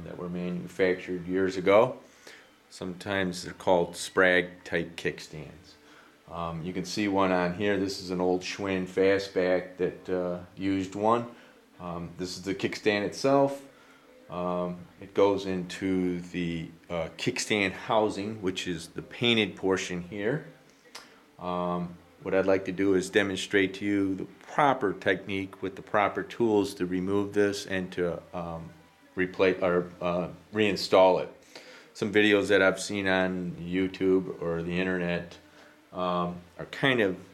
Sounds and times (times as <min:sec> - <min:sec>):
Speech: 0:00.0 - 0:02.0, 0:02.7 - 0:13.7, 0:14.3 - 0:20.6, 0:21.4 - 0:31.4, 0:32.0 - 0:37.3.